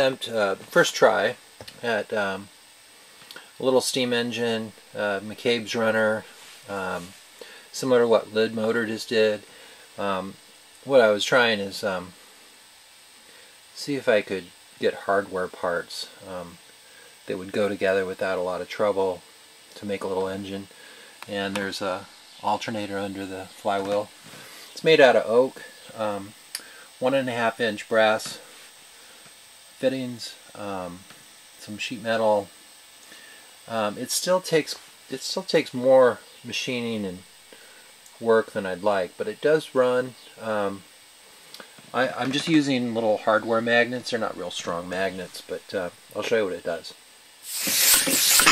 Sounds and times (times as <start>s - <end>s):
Speech: 0.0s - 2.5s, 3.6s - 12.2s, 13.8s - 16.6s, 17.3s - 24.2s, 24.8s - 26.4s, 27.0s - 28.5s, 29.8s - 32.5s, 33.7s - 37.3s, 38.2s - 40.9s, 41.9s - 47.0s.